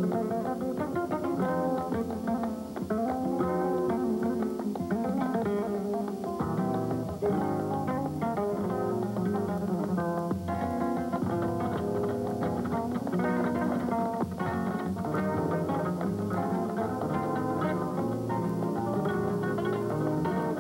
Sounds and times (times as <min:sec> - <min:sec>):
Acoustic guitar: 0:00.0 - 0:20.6.